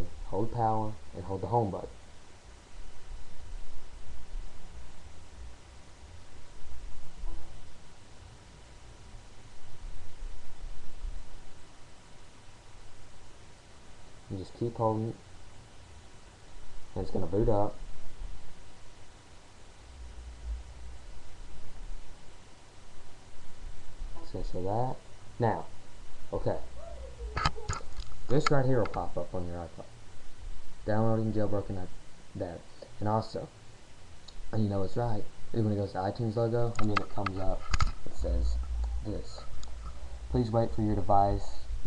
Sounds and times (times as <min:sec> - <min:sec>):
Speech: 0:00.0 - 0:02.0, 0:14.3 - 0:15.2, 0:17.0 - 0:17.8, 0:24.2 - 0:30.0, 0:30.9 - 0:33.6, 0:34.5 - 0:39.5, 0:40.3 - 0:41.8.